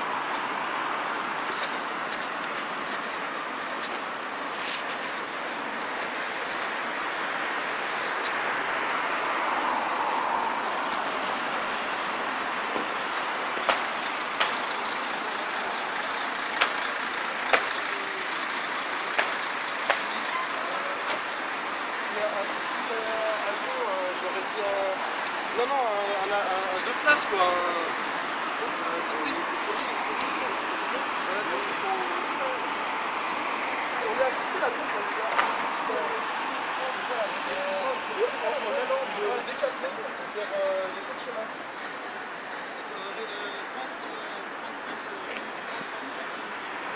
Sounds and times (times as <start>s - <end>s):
Speech: 22.0s - 28.0s, 28.6s - 32.8s, 33.9s - 41.6s, 42.8s - 46.7s.